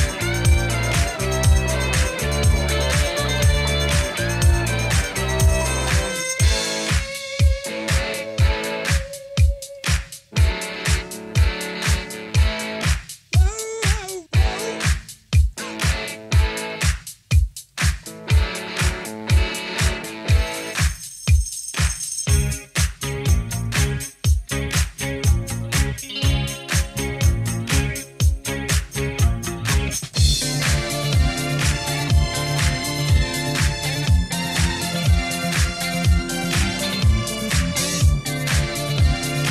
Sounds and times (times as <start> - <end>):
Background music: 0.0 - 21.1, 21.8 - 39.5.